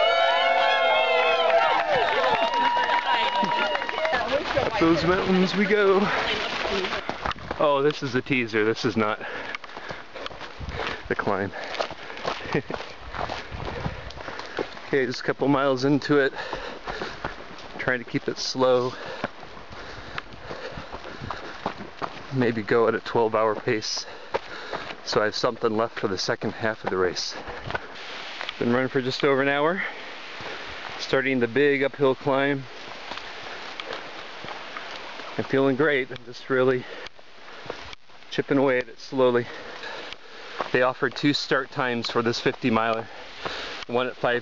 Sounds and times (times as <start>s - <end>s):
Outside, rural or natural: 0.0s - 44.4s
Speech: 22.3s - 24.1s, 25.1s - 27.4s, 35.4s - 36.9s, 38.3s - 39.5s, 40.8s - 43.1s, 43.9s - 44.4s.